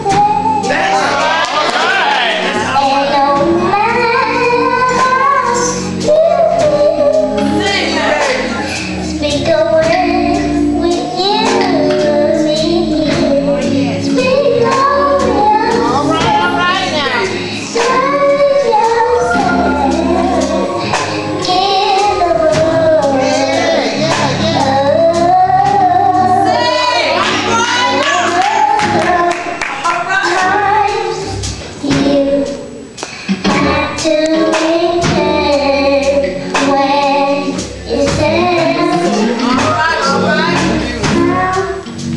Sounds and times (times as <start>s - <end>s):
Child singing: 0.0s - 32.8s, 33.4s - 42.0s
Music: 0.0s - 42.1s
Speech: 15.8s - 17.4s, 38.8s - 41.6s.